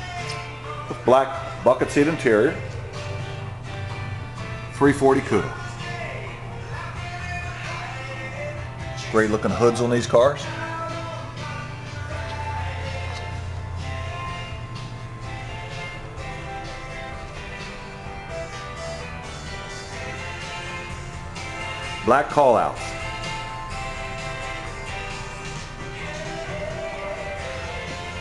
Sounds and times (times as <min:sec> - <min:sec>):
Music: 0:00.0 - 0:28.2.